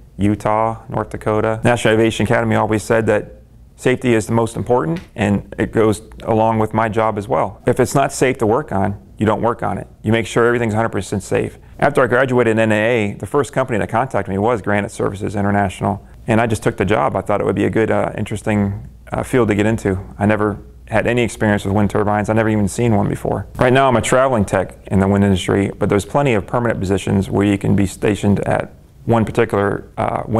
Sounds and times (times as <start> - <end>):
Speech: 0.2 - 30.3.